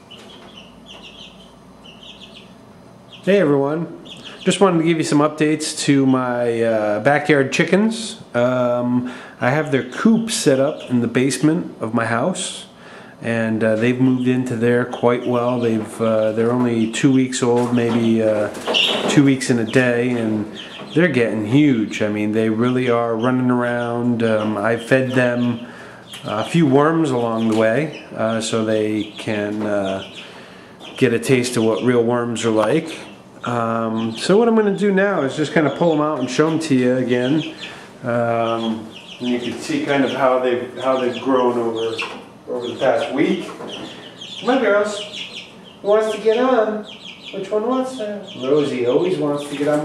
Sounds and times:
Speech: 0:03.2 - 0:30.1, 0:31.0 - 0:43.6, 0:44.4 - 0:45.2, 0:45.8 - 0:49.8.

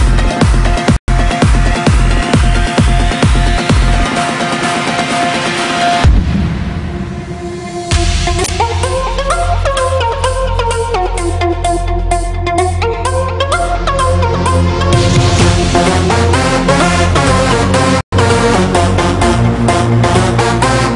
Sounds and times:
Music: 0:00.0 - 0:20.9.

